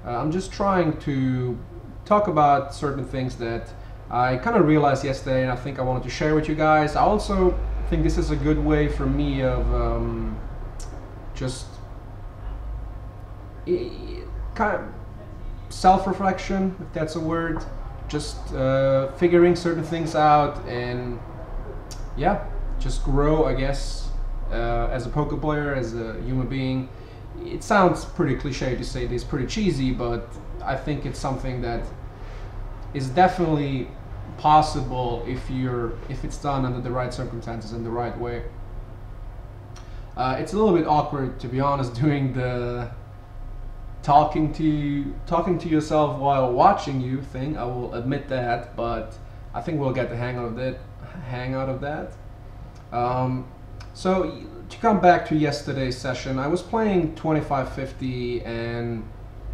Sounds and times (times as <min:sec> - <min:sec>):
Speech: 0:00.0 - 0:11.8, 0:13.6 - 0:32.0, 0:32.9 - 0:38.6, 0:40.2 - 0:43.0, 0:44.0 - 0:52.2, 0:52.9 - 0:59.1.